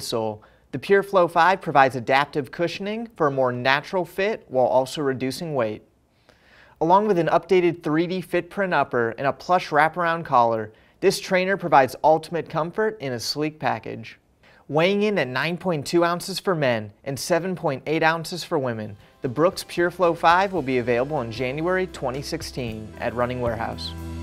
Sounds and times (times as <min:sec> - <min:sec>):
Speech: 0:00.0 - 0:05.9, 0:06.8 - 0:24.0
Music: 0:18.9 - 0:24.2.